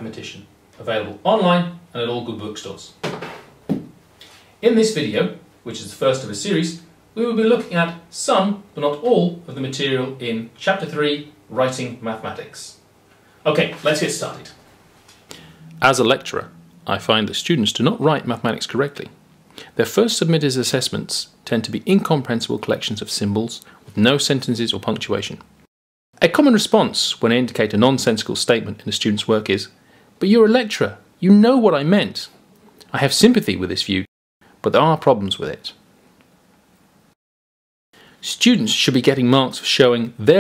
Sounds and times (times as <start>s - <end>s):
Speech: 0.0s - 3.0s, 4.6s - 12.8s, 13.4s - 14.6s, 15.7s - 25.5s, 26.2s - 35.8s, 38.2s - 40.4s.